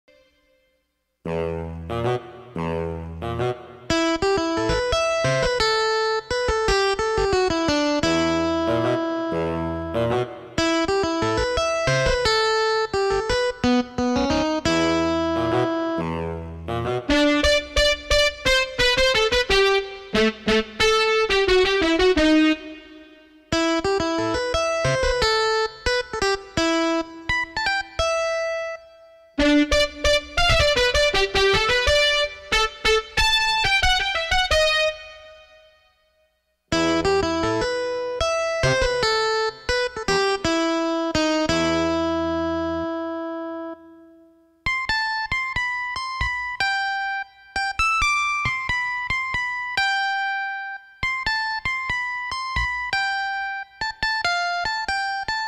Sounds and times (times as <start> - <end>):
Electric piano: 1.3 - 35.4, 36.7 - 44.2.